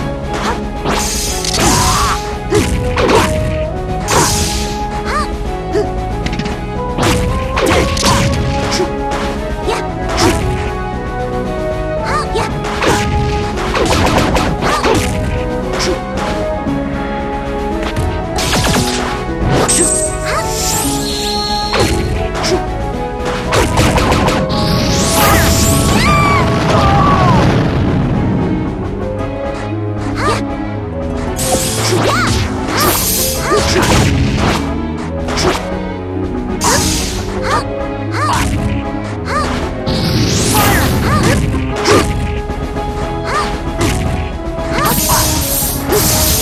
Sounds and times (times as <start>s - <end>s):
Music: 0.0s - 46.4s.